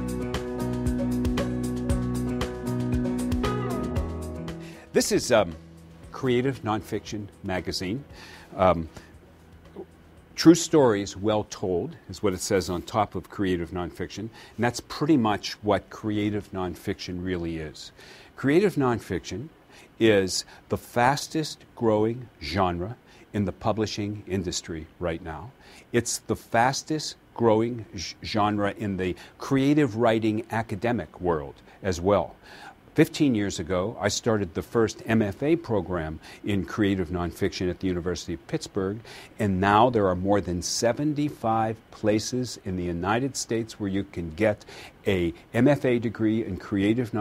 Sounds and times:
Speech: 4.9 - 9.0, 9.8 - 32.4, 33.0 - 47.2.

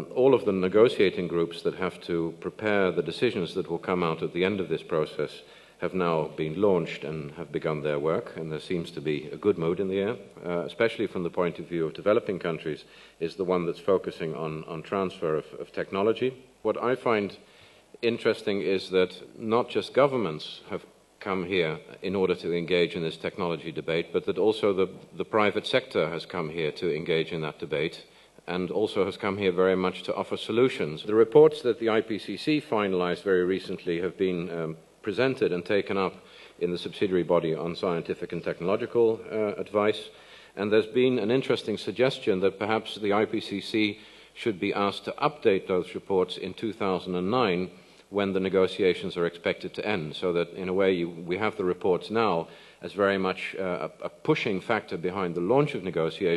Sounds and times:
Speech: 0.0 - 56.3.

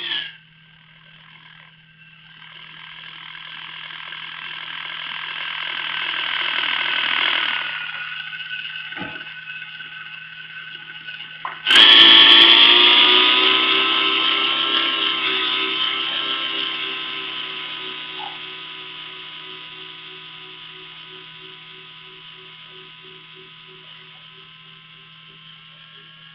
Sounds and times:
Helicopter: 1.0 - 24.6.

